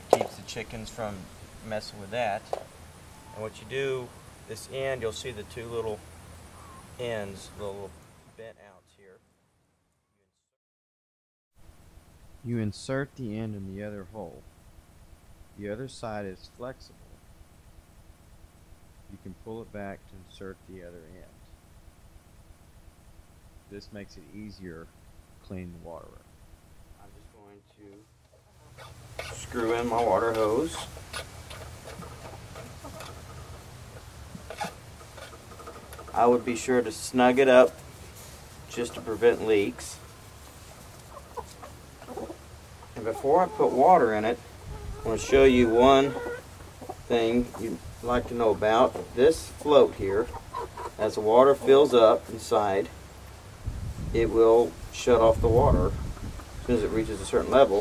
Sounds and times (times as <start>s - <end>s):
Speech: 0.2s - 2.5s, 3.4s - 6.0s, 7.0s - 9.2s, 12.4s - 14.4s, 15.6s - 17.1s, 19.1s - 21.4s, 23.7s - 26.2s, 27.0s - 28.0s, 29.3s - 30.9s, 36.1s - 37.8s, 38.7s - 40.0s, 43.0s - 44.4s, 45.0s - 46.2s, 47.1s - 50.3s, 51.0s - 52.9s, 54.1s - 56.0s, 56.7s - 57.8s.